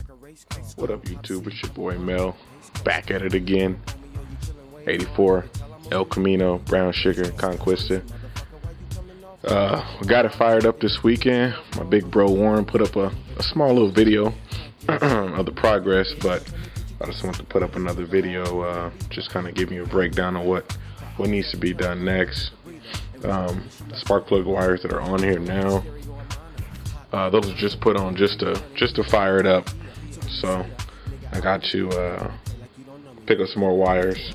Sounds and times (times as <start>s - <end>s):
Music: 0.0s - 34.3s
Speech: 0.7s - 3.8s, 4.8s - 8.2s, 9.4s - 14.4s, 15.0s - 26.0s, 27.1s - 34.3s.